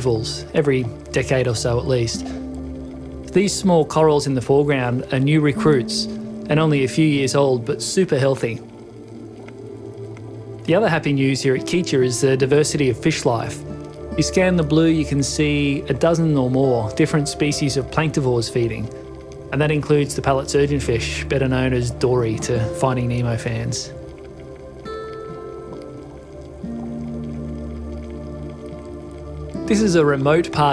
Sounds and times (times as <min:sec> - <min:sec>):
Speech: 0:00.0 - 0:02.4, 0:03.3 - 0:08.6, 0:10.7 - 0:24.0, 0:29.6 - 0:30.7
Music: 0:00.0 - 0:30.7.